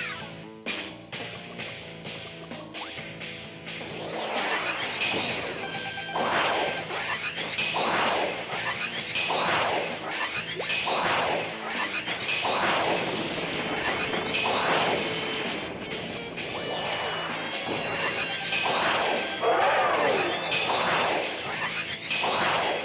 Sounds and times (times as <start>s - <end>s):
Music: 0.0s - 22.8s.